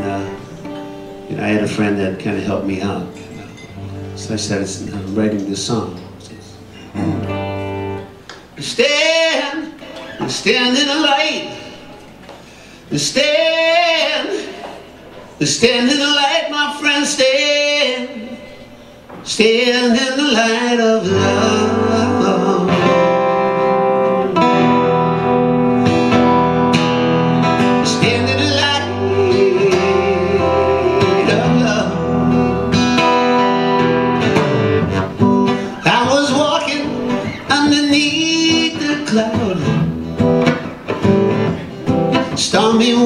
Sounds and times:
Music: 0:00.0 - 0:11.6, 0:19.3 - 0:43.0
Male singing: 0:08.6 - 0:11.6, 0:12.9 - 0:14.6, 0:15.4 - 0:18.5, 0:19.3 - 0:23.1, 0:27.8 - 0:32.3, 0:35.8 - 0:39.8, 0:42.3 - 0:43.0.

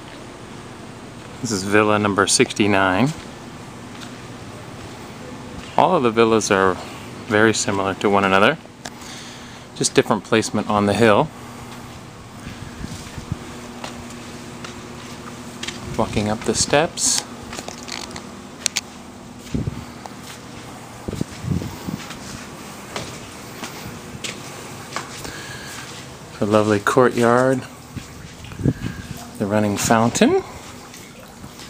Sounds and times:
Speech: 0:01.4 - 0:03.2, 0:05.3 - 0:08.6, 0:09.8 - 0:11.3, 0:15.9 - 0:17.3, 0:26.4 - 0:27.7, 0:29.4 - 0:30.6.

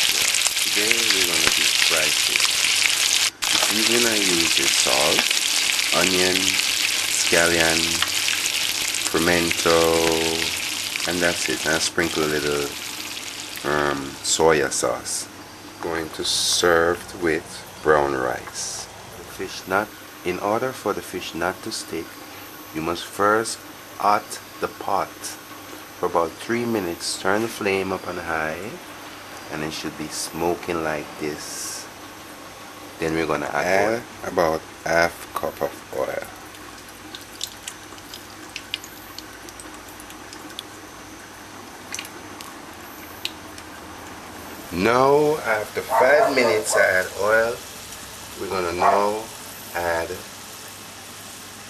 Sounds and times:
Speech: 0:00.1 - 0:02.5, 0:03.6 - 0:05.3, 0:05.9 - 0:06.6, 0:07.2 - 0:08.0, 0:09.1 - 0:12.8, 0:13.6 - 0:22.1, 0:22.7 - 0:25.4, 0:26.0 - 0:28.8, 0:29.5 - 0:31.9, 0:33.0 - 0:36.3, 0:44.7 - 0:47.6, 0:48.4 - 0:50.3
Drip: 0:36.3 - 0:40.7, 0:41.9 - 0:42.5.

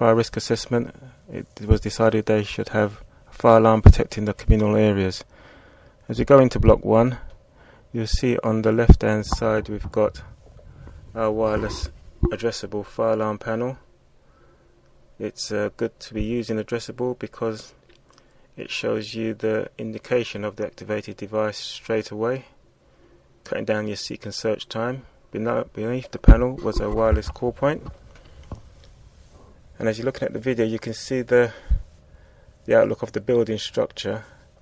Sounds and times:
Speech: 0:00.0 - 0:05.3, 0:06.1 - 0:07.3, 0:07.9 - 0:10.3, 0:11.2 - 0:13.8, 0:15.2 - 0:17.8, 0:18.6 - 0:22.6, 0:23.5 - 0:27.9, 0:29.8 - 0:31.7, 0:32.7 - 0:34.4.

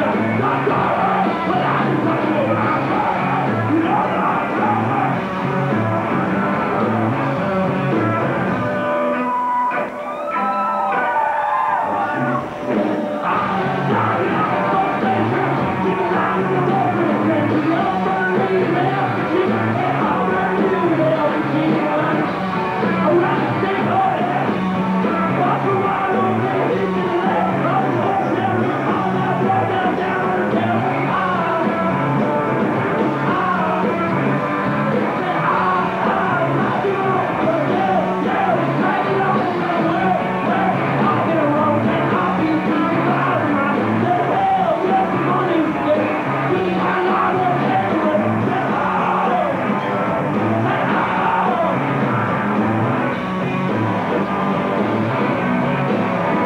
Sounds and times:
Music: 0:00.0 - 0:56.4.

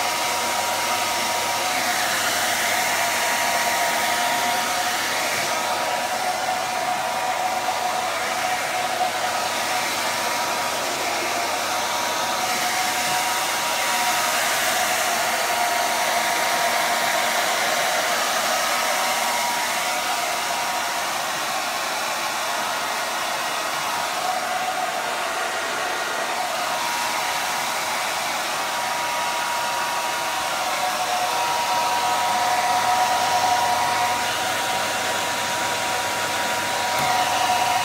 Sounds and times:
Hair dryer: 0:00.0 - 0:37.8.

